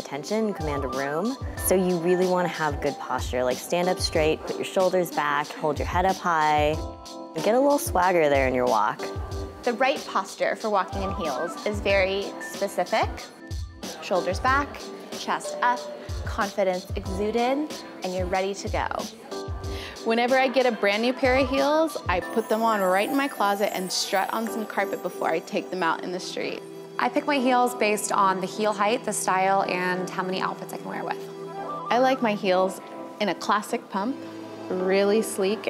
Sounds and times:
Speech: 0:00.0 - 0:06.8, 0:09.7 - 0:13.2, 0:14.0 - 0:19.0, 0:20.0 - 0:31.2, 0:31.9 - 0:35.7
Music: 0:00.0 - 0:35.7.

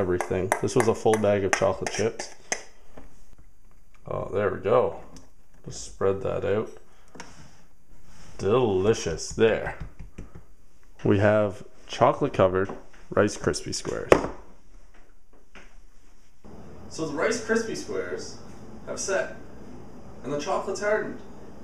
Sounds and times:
Speech: 0:00.0 - 0:02.4, 0:04.0 - 0:06.8, 0:08.4 - 0:09.8, 0:11.0 - 0:14.2, 0:16.9 - 0:19.4, 0:20.2 - 0:21.2
Inside, small room: 0:00.0 - 0:21.6.

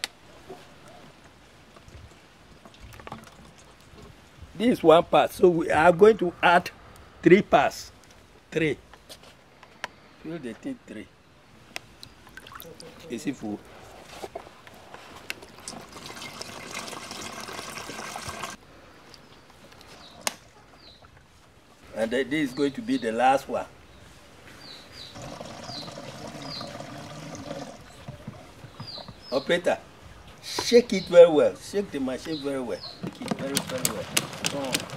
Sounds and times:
Water: 0:00.0 - 0:04.6, 0:11.9 - 0:13.9, 0:15.0 - 0:22.0, 0:25.1 - 0:30.4.

